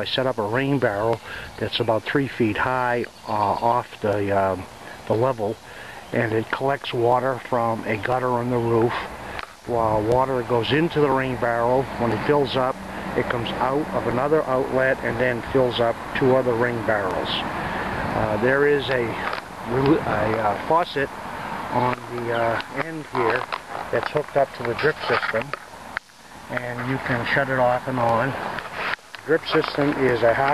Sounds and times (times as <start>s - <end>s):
Speech: 0.0s - 9.1s, 9.7s - 17.5s, 18.2s - 21.1s, 21.7s - 25.6s, 26.5s - 28.4s, 29.3s - 30.5s.